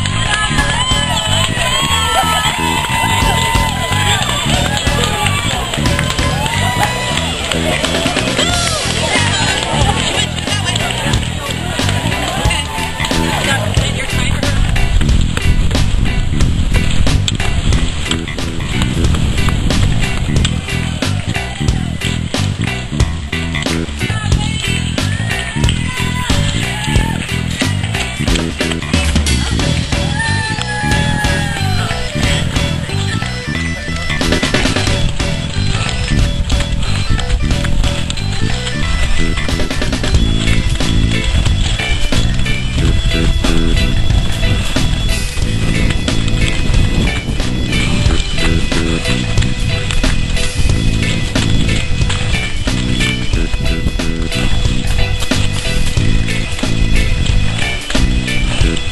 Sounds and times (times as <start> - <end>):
Music: 0.0 - 58.9
Outside, rural or natural: 0.0 - 58.9
Run: 0.0 - 58.9
Speech: 8.3 - 14.9, 24.0 - 27.2.